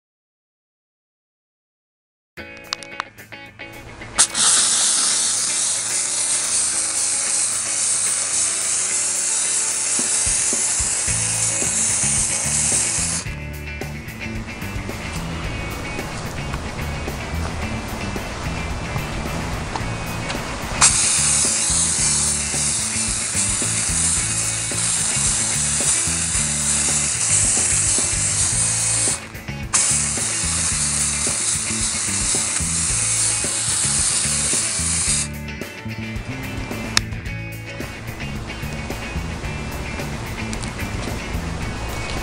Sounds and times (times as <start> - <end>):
Music: 2.4 - 42.2
Steam: 4.2 - 13.2, 14.8 - 35.3.